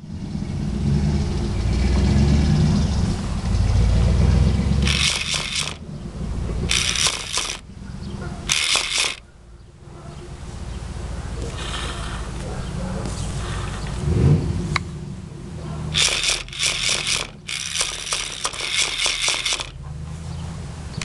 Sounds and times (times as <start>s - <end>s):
Car: 0.0s - 4.9s, 9.5s - 16.0s, 19.7s - 21.0s.